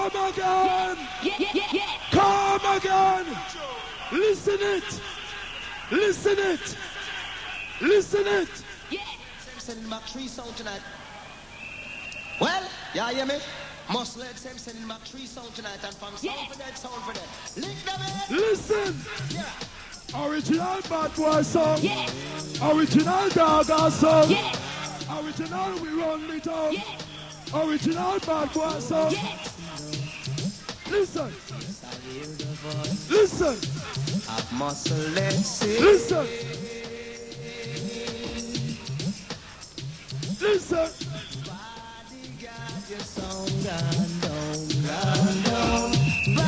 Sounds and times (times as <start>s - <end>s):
Music: 15.0s - 46.4s.